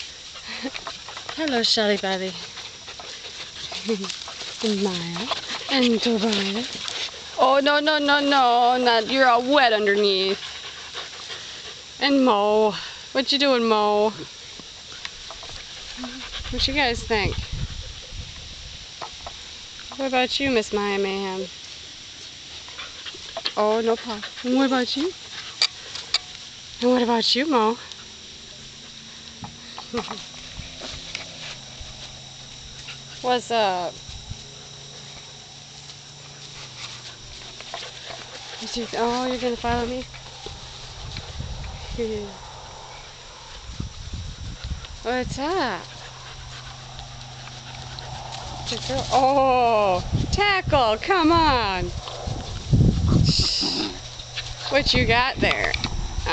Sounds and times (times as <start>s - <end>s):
Outside, rural or natural: 0.0s - 56.3s
Dog: 14.8s - 18.5s, 45.6s - 49.2s
Speech: 48.7s - 51.9s.